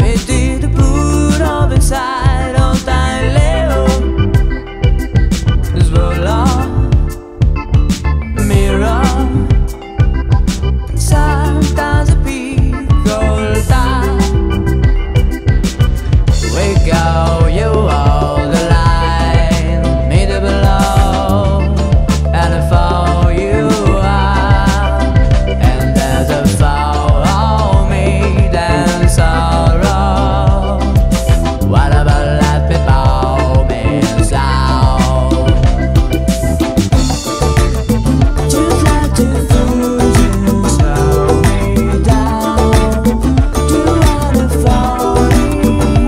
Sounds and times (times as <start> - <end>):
Music: 0.0 - 46.0.